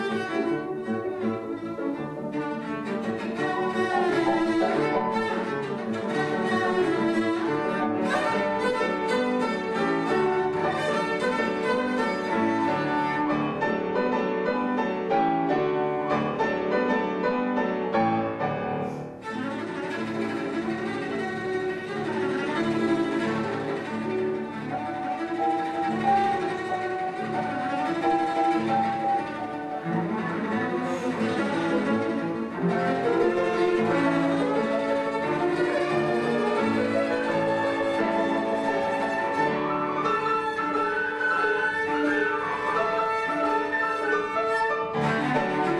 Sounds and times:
Cello: 0.0s - 45.7s
Classical music: 0.0s - 45.7s
Piano: 0.0s - 45.7s.

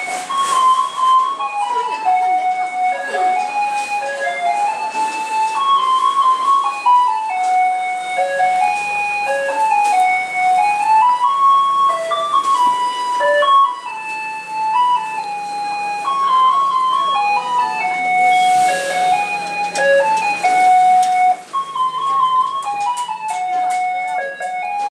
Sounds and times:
Ice cream truck, ice cream van: 0.0s - 24.9s
Music: 0.0s - 24.9s.

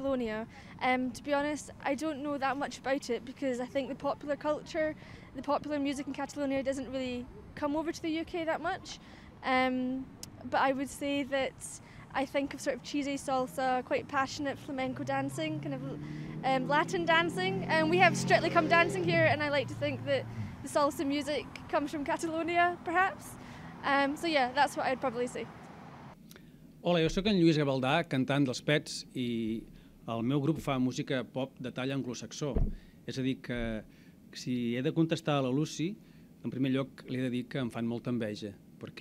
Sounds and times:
Speech: 0.0s - 25.4s.

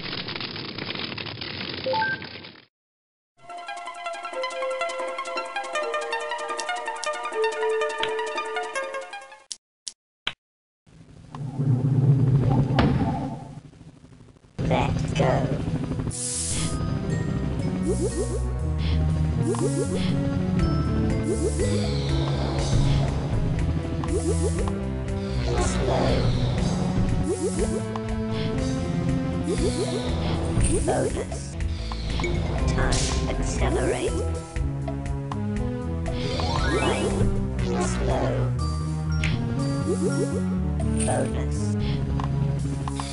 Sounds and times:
Music: 3.4s - 9.5s, 15.8s - 43.1s
Speech: 14.6s - 15.7s, 25.5s - 26.3s, 30.7s - 31.5s, 32.7s - 34.2s, 37.8s - 38.5s, 41.0s - 41.8s.

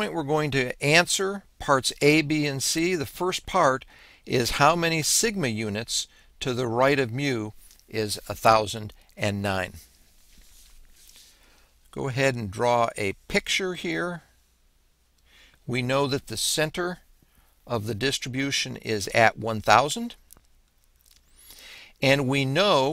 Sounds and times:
Speech: 0.0s - 9.9s, 11.9s - 14.3s, 15.7s - 17.0s, 17.7s - 20.2s, 22.0s - 22.9s.

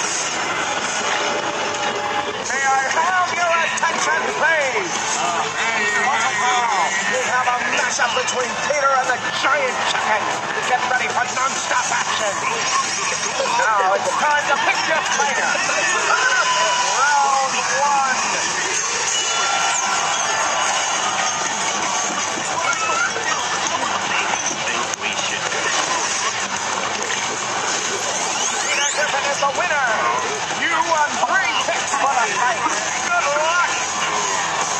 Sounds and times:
Music: 0.0s - 34.7s
Speech: 2.5s - 18.4s, 28.7s - 33.8s.

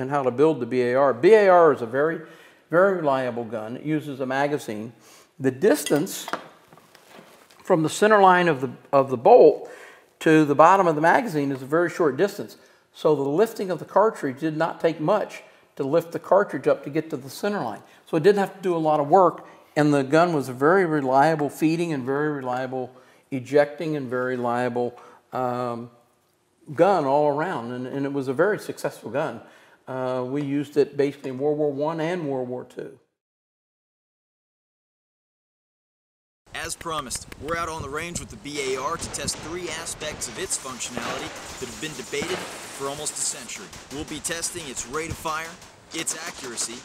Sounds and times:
Gasp: 2.2s - 2.7s, 5.0s - 5.4s, 9.6s - 10.1s, 12.6s - 12.9s, 17.9s - 18.1s, 19.4s - 19.8s, 23.0s - 23.3s, 25.0s - 25.3s, 29.4s - 29.9s.

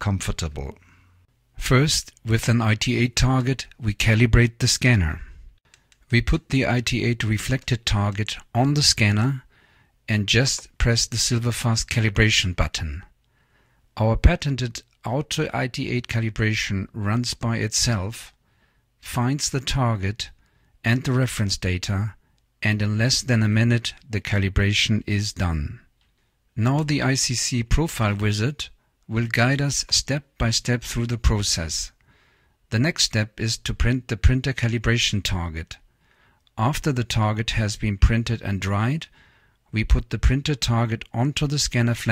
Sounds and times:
Speech: 0.0s - 1.0s, 1.6s - 5.5s, 6.1s - 9.5s, 10.1s - 13.2s, 14.0s - 18.4s, 19.0s - 25.9s, 26.6s - 32.0s, 32.7s - 35.9s, 36.6s - 42.1s.

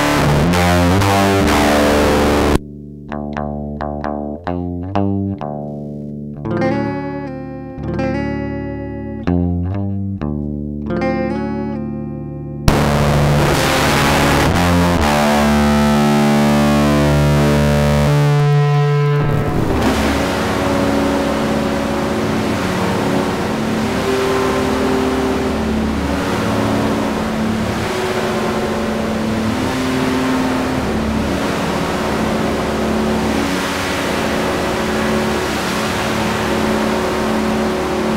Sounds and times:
Distortion: 0.0s - 38.1s
Effects unit: 0.0s - 38.1s
Guitar: 0.0s - 38.1s.

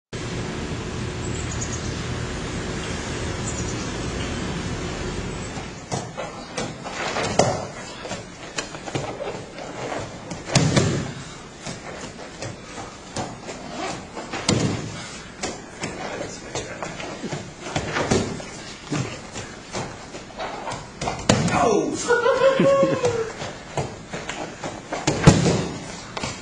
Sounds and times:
White noise: 0.2s - 26.4s.

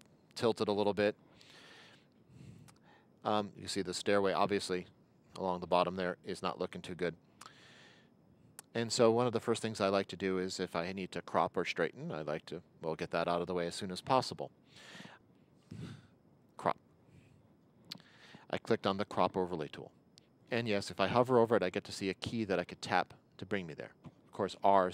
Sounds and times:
Speech: 0.4s - 1.2s, 3.2s - 7.2s, 8.6s - 14.5s, 16.6s - 16.8s, 18.5s - 24.9s.

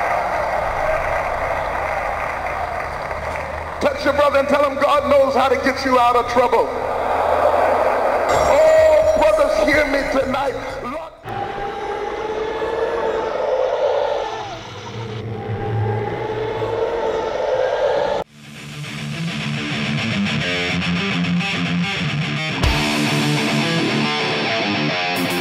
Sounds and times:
Speech: 3.8s - 6.8s, 8.3s - 11.2s.

